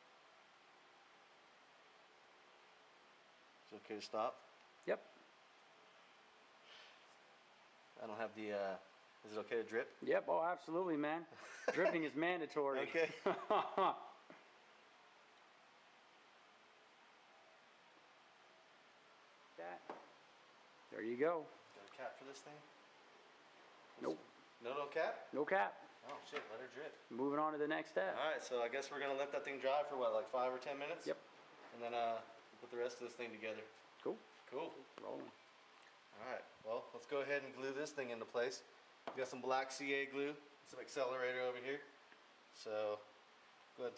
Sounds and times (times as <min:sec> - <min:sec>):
Inside, small room: 0:00.0 - 0:43.9
Speech: 0:03.6 - 0:05.1, 0:08.0 - 0:13.2, 0:19.6 - 0:19.9, 0:20.9 - 0:22.7, 0:24.0 - 0:35.4, 0:36.2 - 0:41.9, 0:42.6 - 0:43.1.